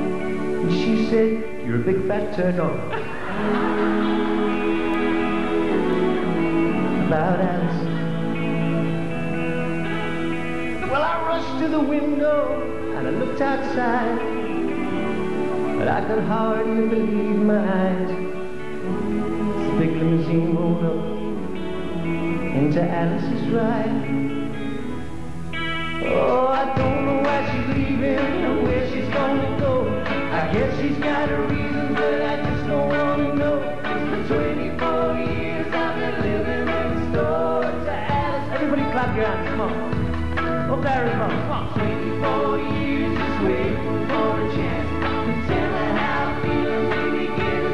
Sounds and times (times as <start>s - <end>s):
Music: 0.0s - 47.7s.